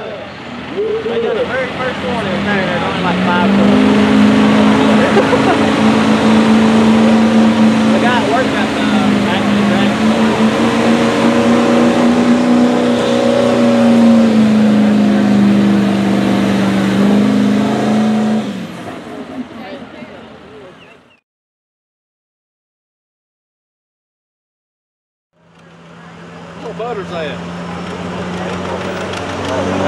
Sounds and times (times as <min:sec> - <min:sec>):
Speech: 0:00.0 - 0:03.9, 0:07.9 - 0:10.1, 0:26.0 - 0:27.4.